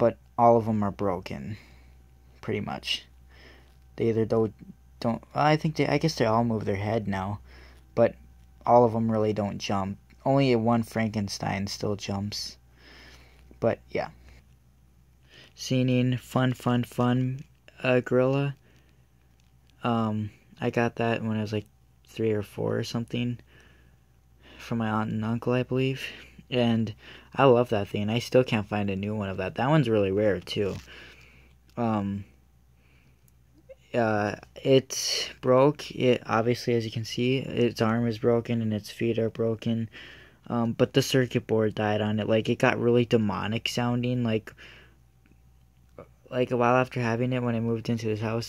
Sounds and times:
Speech: 0.0s - 1.7s, 2.4s - 3.1s, 4.0s - 7.4s, 8.0s - 12.6s, 13.6s - 14.2s, 15.6s - 18.6s, 19.8s - 23.4s, 24.6s - 30.9s, 31.8s - 32.3s, 33.7s - 44.6s, 46.0s - 48.4s.

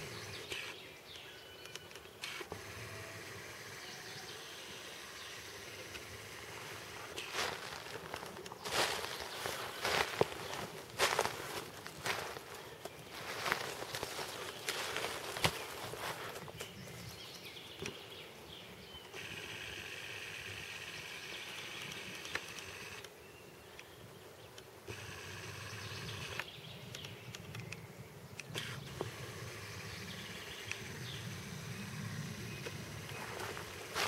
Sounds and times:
Outside, rural or natural: 0.0s - 34.0s.

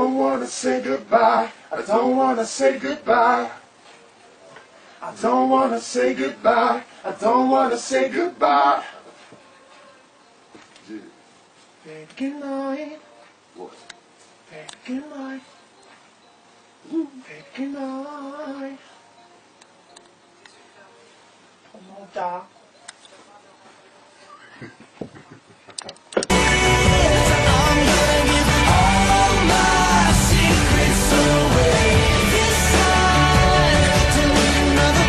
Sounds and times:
Male singing: 0.0s - 3.6s, 5.0s - 9.0s, 11.8s - 13.2s, 14.5s - 15.5s, 16.9s - 18.8s, 26.3s - 35.0s
Choir: 0.0s - 3.7s, 5.0s - 9.1s, 26.3s - 35.0s.

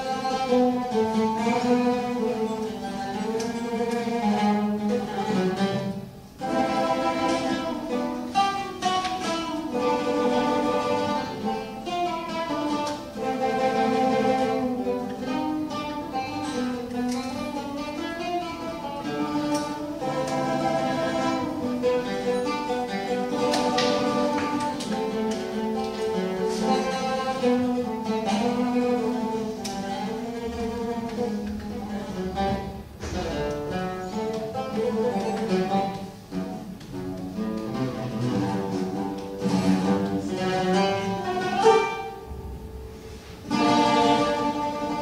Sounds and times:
Acoustic guitar: 0.0s - 45.0s.

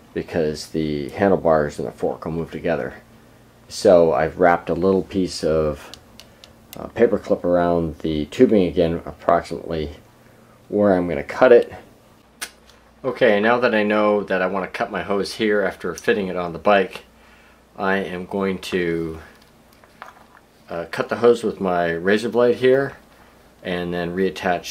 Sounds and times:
Inside, small room: 0.0s - 24.7s
Speech: 0.2s - 3.1s, 3.7s - 6.0s, 6.8s - 10.0s, 10.7s - 11.9s, 13.0s - 17.1s, 17.8s - 19.4s, 20.7s - 23.0s, 23.6s - 24.7s.

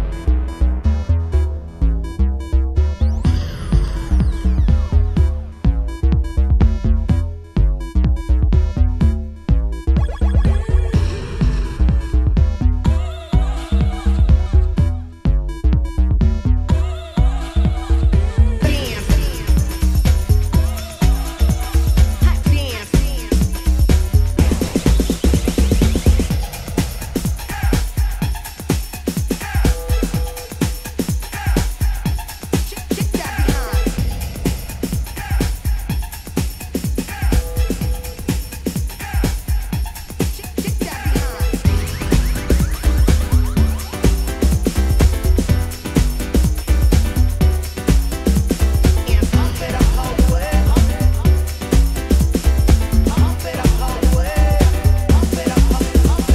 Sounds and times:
Music: 0.0s - 56.3s.

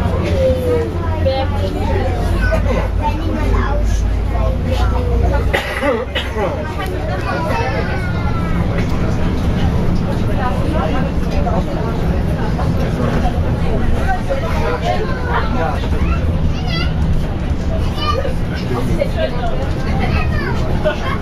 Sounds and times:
Bus: 0.0s - 21.2s
Speech: 0.0s - 21.2s.

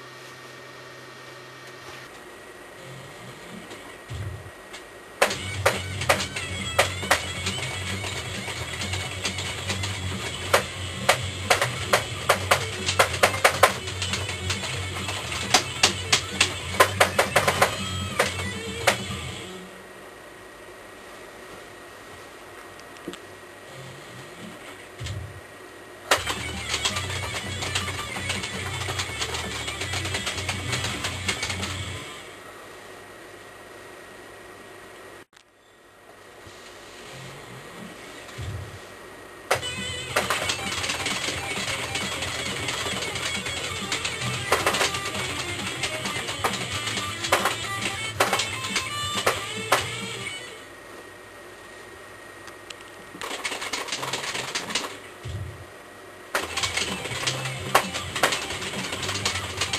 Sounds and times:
Bass guitar: 5.2s - 19.5s.

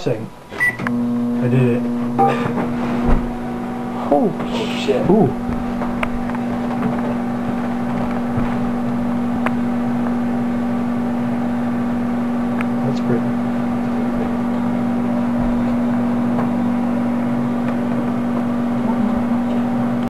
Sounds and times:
Speech: 0.0s - 0.3s, 4.0s - 5.4s, 18.8s - 19.5s.

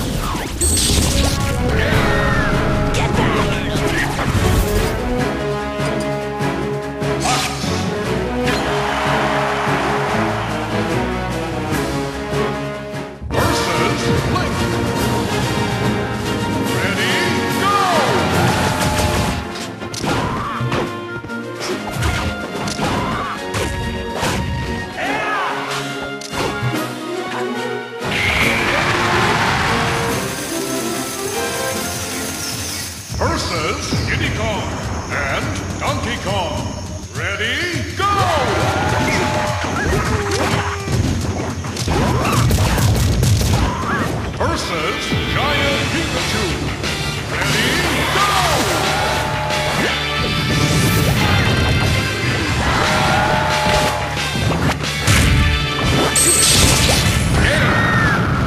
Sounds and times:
Music: 0.0s - 58.4s
Speech: 1.8s - 4.2s, 33.2s - 39.3s, 44.4s - 46.6s.

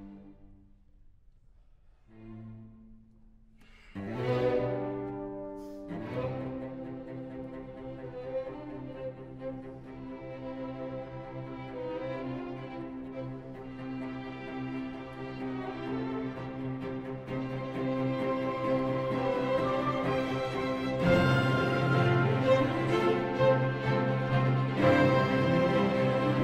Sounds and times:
Cello: 0.0s - 1.0s, 1.6s - 26.4s
Violin, fiddle: 3.8s - 26.4s.

